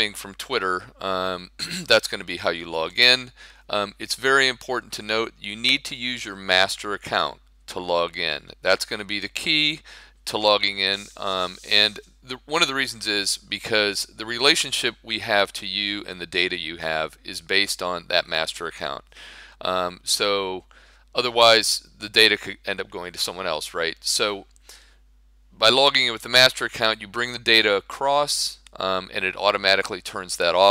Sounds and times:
Speech: 0:00.0 - 0:24.5, 0:25.6 - 0:30.7.

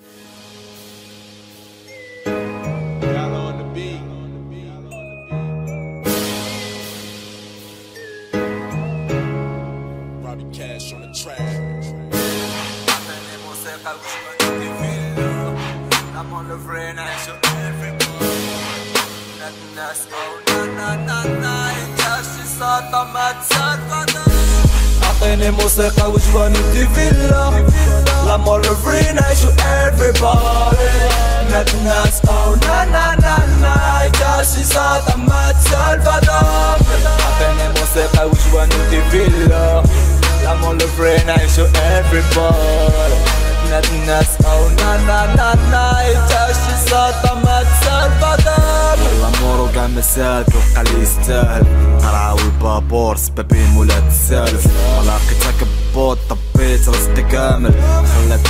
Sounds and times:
Music: 0:00.0 - 0:58.5.

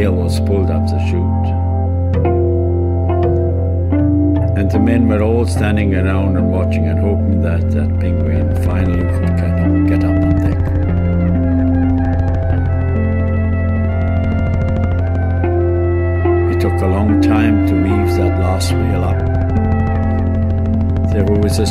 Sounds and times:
Ambient music: 0:00.0 - 0:21.7.

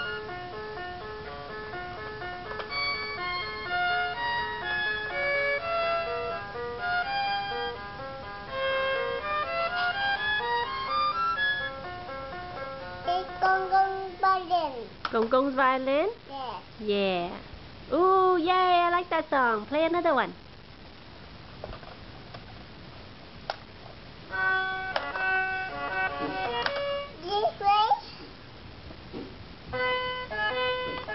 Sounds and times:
Speech: 0:13.2 - 0:20.4.

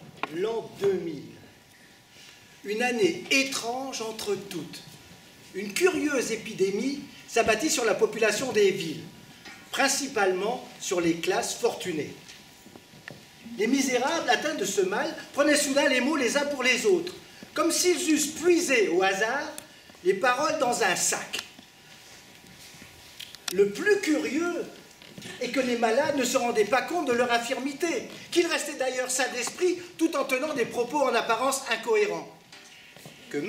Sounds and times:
Speech: 0:00.3 - 0:01.5, 0:02.7 - 0:09.1, 0:09.7 - 0:12.2, 0:13.5 - 0:21.5, 0:23.5 - 0:32.4, 0:33.3 - 0:33.4.

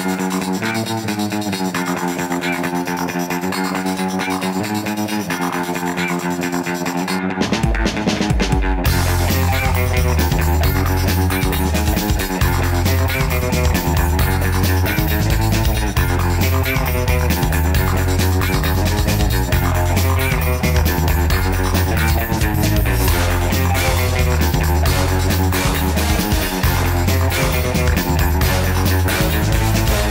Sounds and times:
Music: 0:00.0 - 0:30.1.

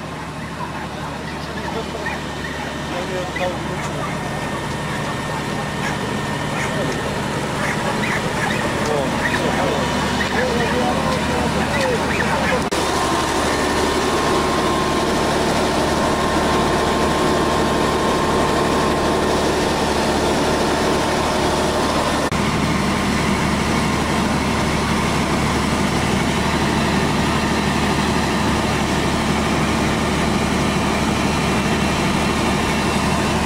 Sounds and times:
Fire: 0:00.0 - 0:33.4.

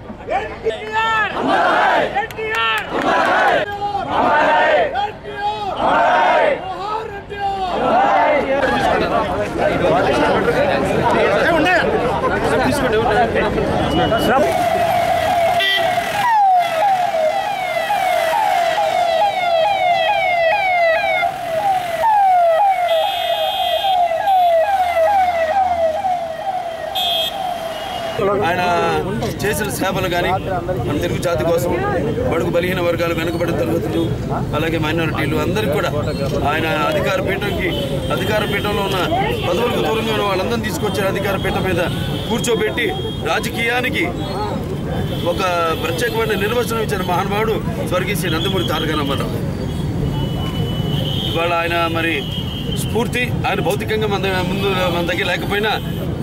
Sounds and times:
Male speech, man speaking: 0:00.3 - 0:01.4, 0:05.0 - 0:05.8, 0:06.6 - 0:14.5, 0:28.2 - 0:49.4, 0:51.4 - 0:55.8.

